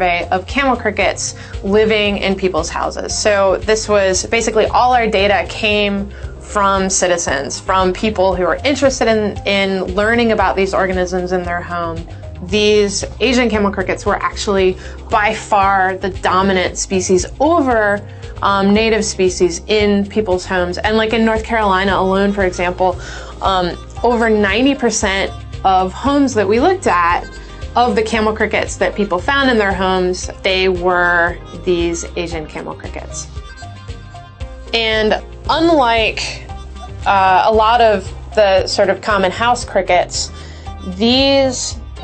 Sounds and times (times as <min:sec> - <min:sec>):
Speech: 0:00.0 - 0:33.3, 0:34.8 - 0:42.0
Music: 0:00.0 - 0:42.0.